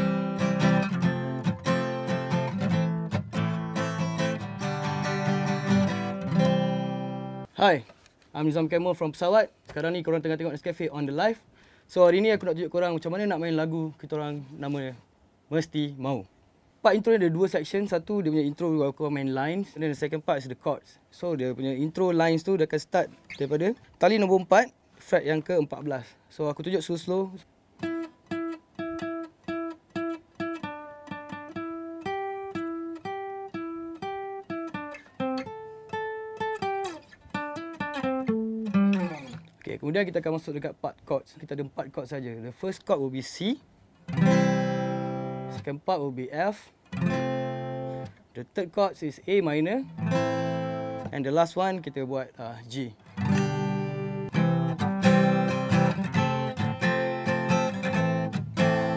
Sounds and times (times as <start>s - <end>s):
Speech: 7.5s - 27.5s, 39.0s - 43.6s, 45.5s - 46.8s, 48.4s - 49.9s, 51.1s - 53.0s.